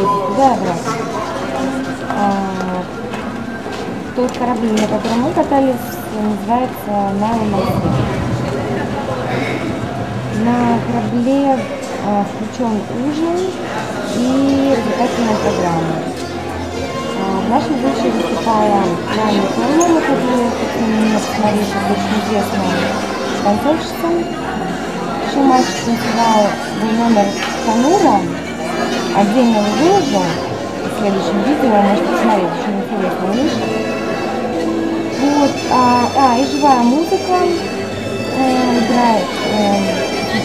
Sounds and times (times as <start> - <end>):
Speech: 0.0 - 3.2, 4.1 - 9.7, 10.3 - 16.2, 16.8 - 33.8, 35.1 - 40.4
Music: 0.0 - 40.4.